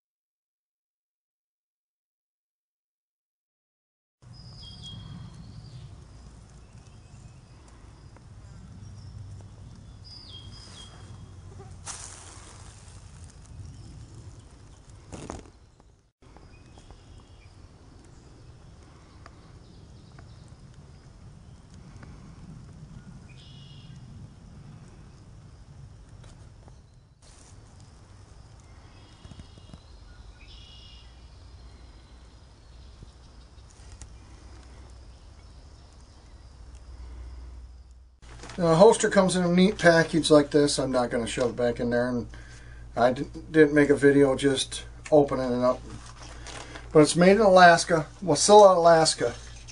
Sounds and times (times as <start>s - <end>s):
Insect: 4.2s - 49.7s
Outside, rural or natural: 4.2s - 49.7s.